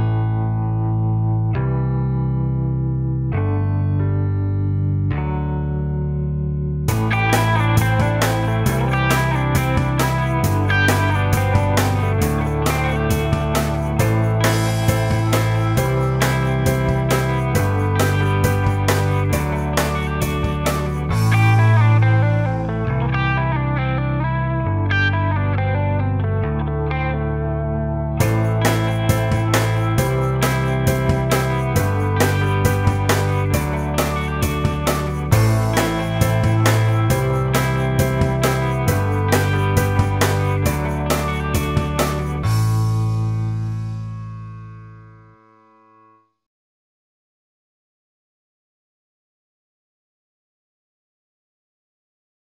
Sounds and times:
Music: 0.0 - 46.4.

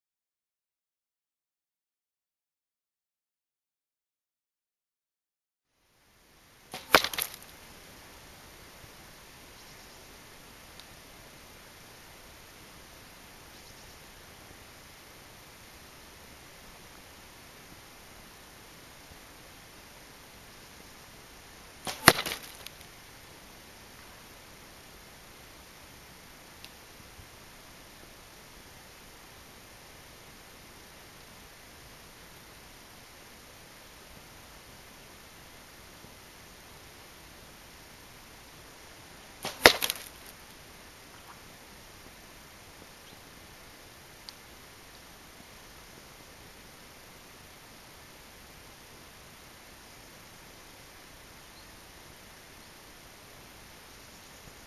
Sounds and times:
Arrow: 6.7 - 7.4, 21.8 - 22.7, 39.4 - 40.3.

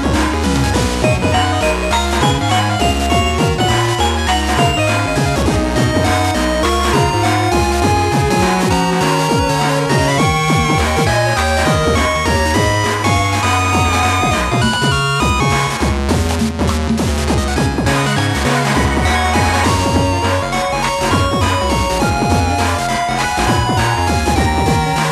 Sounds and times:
Soundtrack music: 0.0 - 25.1.

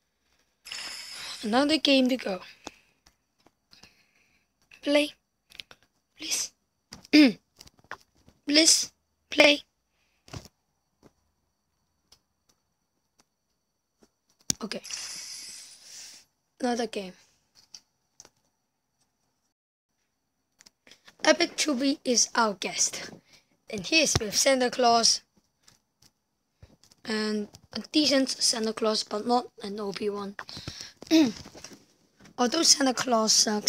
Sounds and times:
Speech: 1.4 - 2.5, 4.8 - 5.2, 16.6 - 17.2, 21.2 - 25.2, 27.1 - 30.4, 32.4 - 33.6.

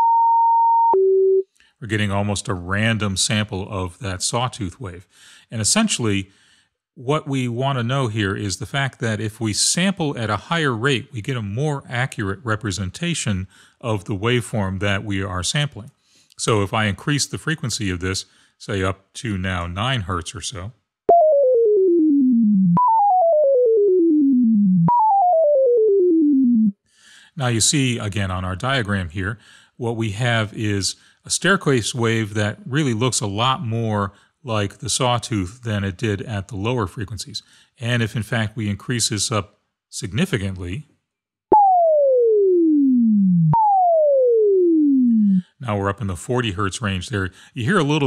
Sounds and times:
Speech: 1.8 - 6.3, 7.0 - 20.8, 27.3 - 40.9, 45.2 - 48.0.

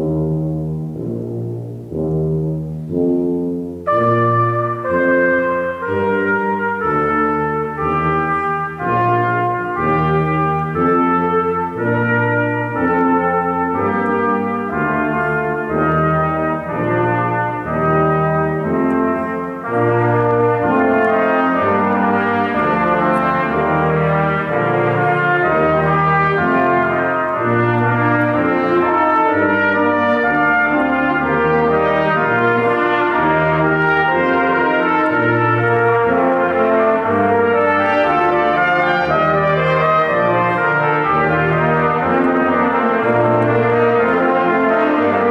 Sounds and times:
Orchestra: 0.0 - 45.3
Trumpet: 0.0 - 45.3.

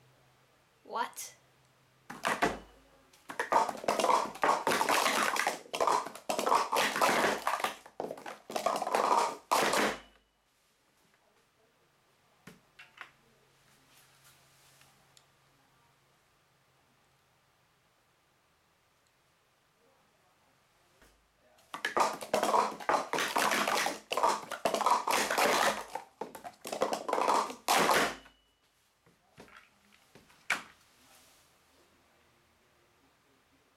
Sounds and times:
Inside, small room: 0.0 - 33.7.

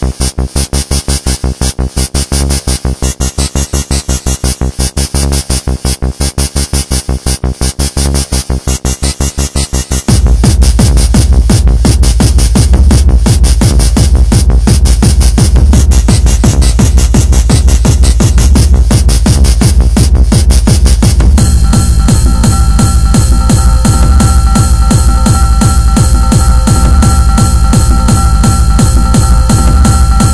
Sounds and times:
Techno: 0.0 - 30.3.

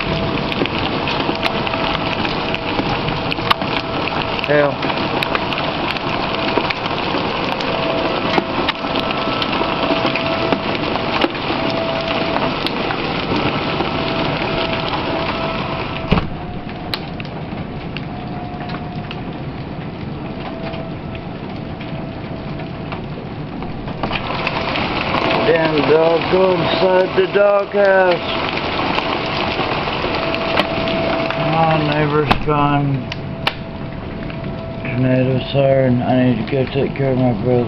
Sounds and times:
Rain on surface: 0.0 - 37.6
Raindrop: 0.0 - 37.6.

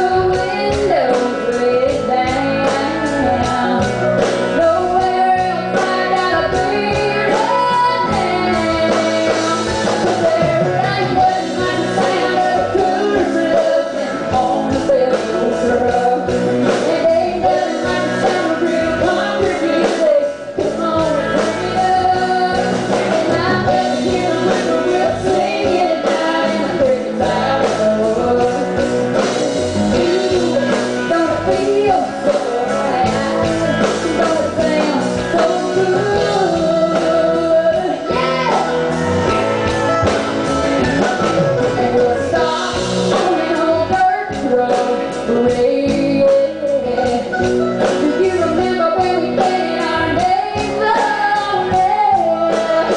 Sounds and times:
Music: 0.0 - 52.9.

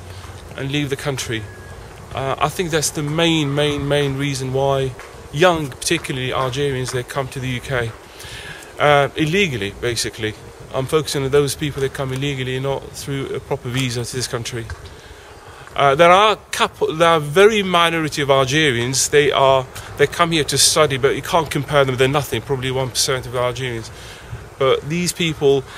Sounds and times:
Outside, urban or manmade: 0.0 - 25.7
Speech: 0.6 - 1.5, 2.1 - 8.0, 8.8 - 14.7, 15.8 - 24.0, 24.6 - 25.7.

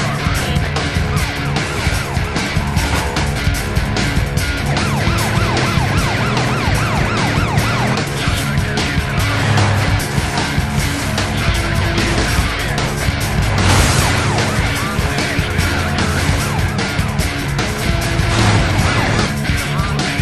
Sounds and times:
Music: 0.0 - 20.2
Vehicle: 0.0 - 20.2.

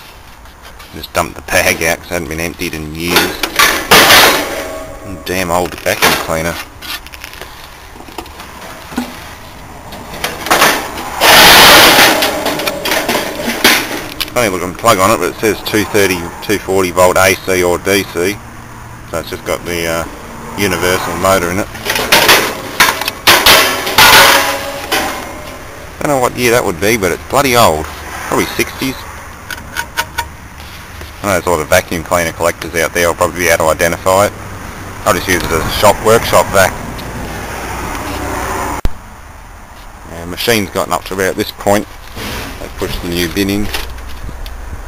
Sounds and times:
Speech: 0.9 - 3.5, 5.0 - 6.6, 14.3 - 18.4, 19.1 - 21.7, 26.0 - 29.1, 31.2 - 34.3, 35.0 - 36.8, 40.0 - 41.9, 42.6 - 43.8.

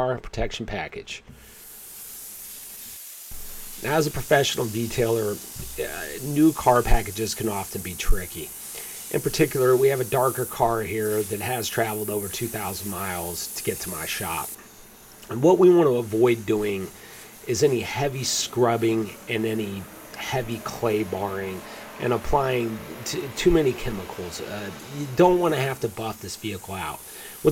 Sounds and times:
Speech: 0.0 - 1.3, 3.8 - 8.5, 9.1 - 14.5, 15.3 - 16.9, 17.5 - 27.5.

